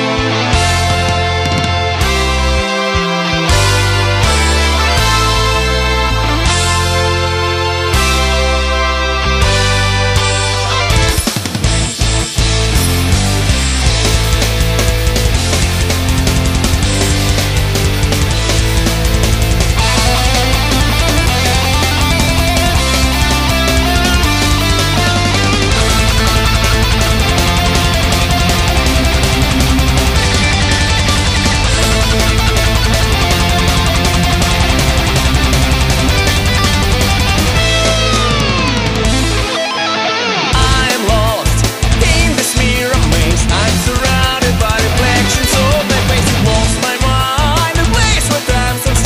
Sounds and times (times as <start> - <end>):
Music: 0.0 - 49.0.